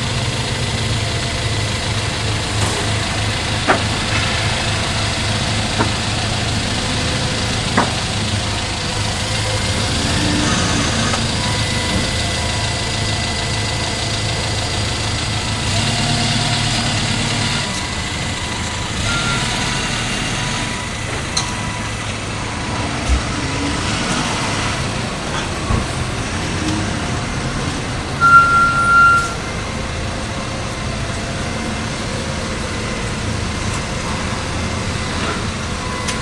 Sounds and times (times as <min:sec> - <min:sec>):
Vehicle: 0:00.0 - 0:36.2.